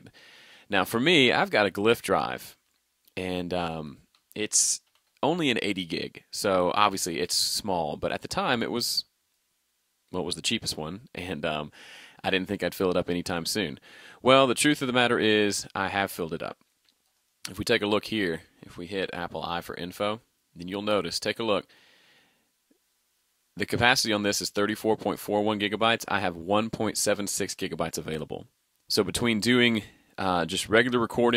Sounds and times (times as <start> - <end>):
Speech: 0.7 - 2.6, 3.2 - 9.1, 10.1 - 16.6, 17.5 - 21.7, 23.6 - 31.3.